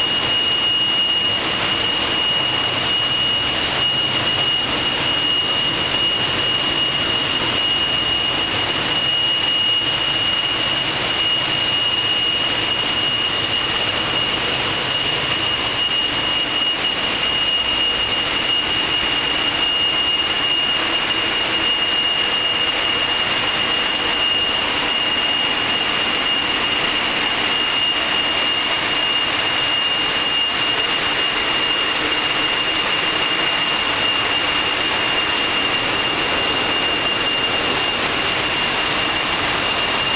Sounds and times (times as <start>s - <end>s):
Heavy engine (low frequency): 0.0s - 40.1s.